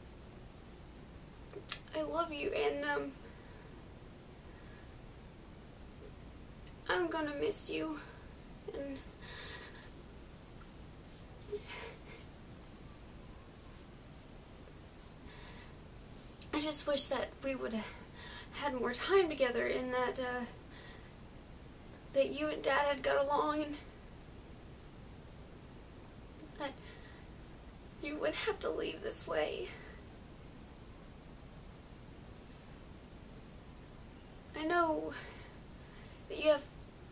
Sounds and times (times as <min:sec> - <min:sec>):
Speech: 0:01.7 - 0:03.2, 0:06.8 - 0:08.1, 0:08.7 - 0:09.0, 0:16.5 - 0:18.0, 0:18.6 - 0:20.6, 0:22.1 - 0:23.9, 0:28.0 - 0:29.8, 0:34.5 - 0:35.3, 0:36.3 - 0:36.7.